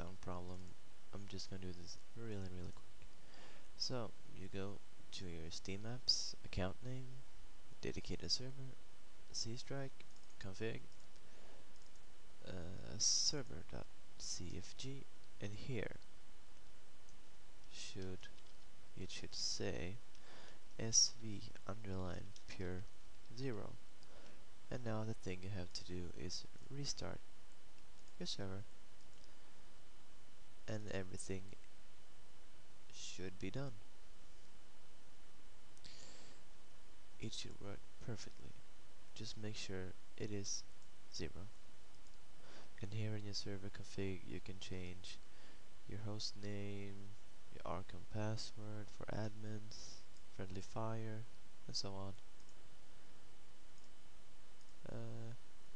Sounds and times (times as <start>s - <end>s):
Speech: 0.0s - 2.8s, 3.8s - 7.2s, 7.8s - 10.9s, 12.4s - 16.0s, 17.7s - 18.4s, 19.0s - 20.0s, 20.8s - 23.8s, 24.7s - 27.3s, 28.2s - 28.7s, 30.7s - 31.6s, 32.9s - 33.8s, 37.2s - 38.6s, 39.2s - 41.5s, 42.8s - 45.2s, 45.9s - 52.2s, 54.8s - 55.4s.